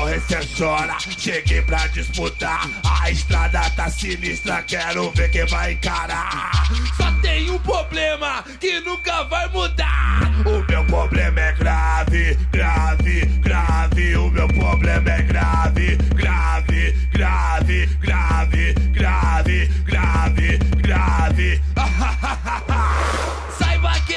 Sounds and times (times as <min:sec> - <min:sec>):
Music: 0:00.0 - 0:08.3, 0:08.9 - 0:24.1.